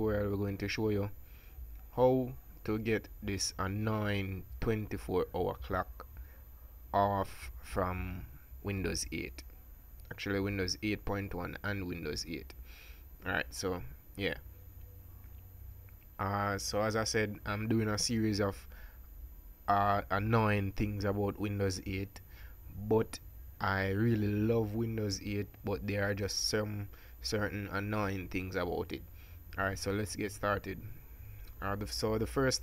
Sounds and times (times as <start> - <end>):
Speech: 0.0 - 1.1, 1.9 - 6.0, 7.0 - 9.4, 10.1 - 12.5, 13.2 - 14.4, 16.2 - 18.7, 19.7 - 22.2, 22.8 - 29.0, 29.6 - 31.0, 31.6 - 32.6.